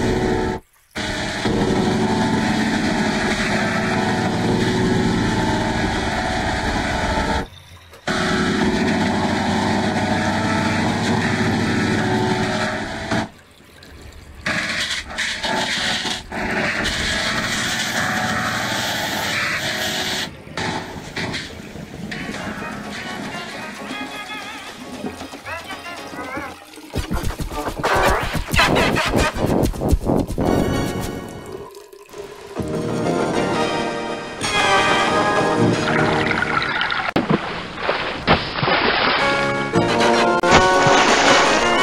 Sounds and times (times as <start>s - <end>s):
Music: 0.0s - 7.5s, 8.1s - 13.3s, 14.5s - 31.7s, 32.6s - 36.7s, 39.2s - 41.8s.